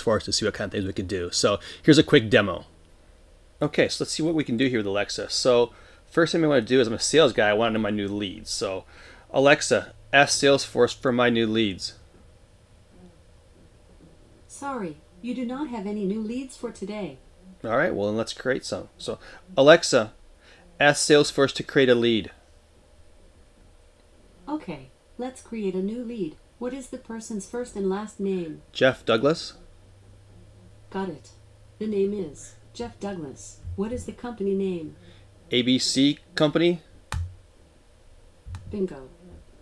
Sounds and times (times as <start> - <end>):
Speech: 0.0 - 2.7, 3.6 - 12.0, 14.5 - 20.2, 24.5 - 29.6, 30.9 - 36.9, 38.7 - 39.2.